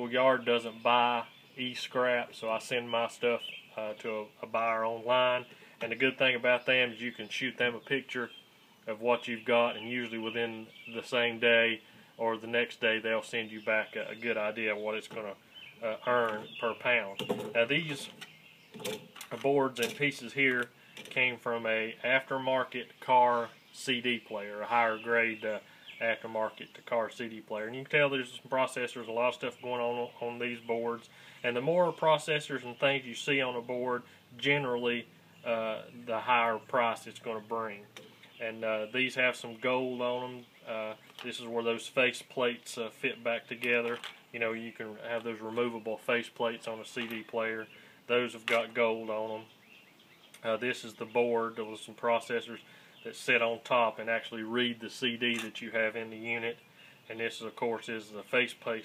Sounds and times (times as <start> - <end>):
Speech: 0.0 - 18.2, 19.3 - 49.5, 50.4 - 58.8.